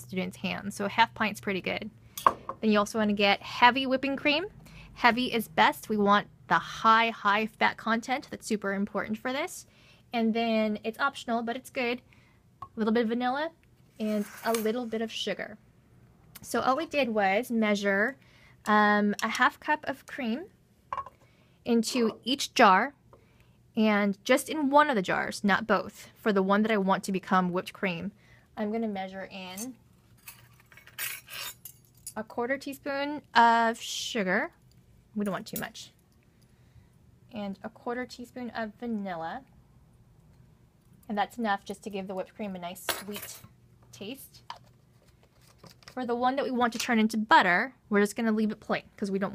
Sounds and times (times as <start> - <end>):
Speech: 0.0 - 1.9, 2.6 - 12.0, 12.8 - 15.6, 16.4 - 20.5, 21.7 - 23.0, 23.8 - 29.8, 32.2 - 34.6, 35.2 - 36.0, 37.3 - 39.5, 41.1 - 44.4, 46.0 - 49.3.